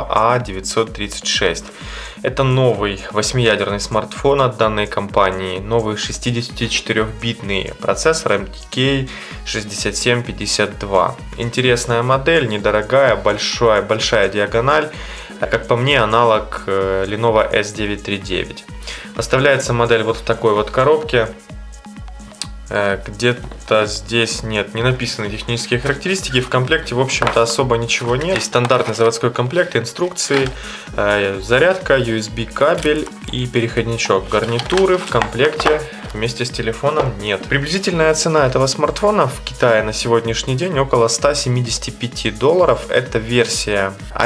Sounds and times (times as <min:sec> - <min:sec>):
Speech: 0:00.0 - 0:21.4, 0:22.7 - 0:44.2
Music: 0:00.0 - 0:44.2.